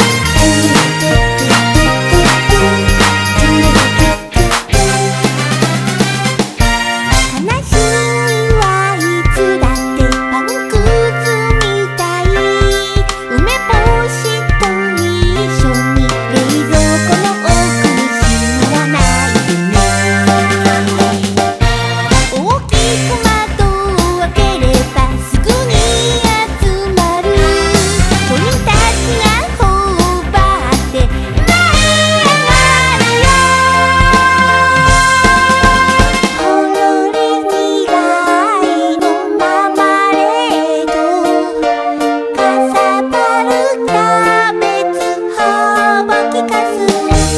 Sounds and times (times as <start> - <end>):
Music: 0.0 - 47.3.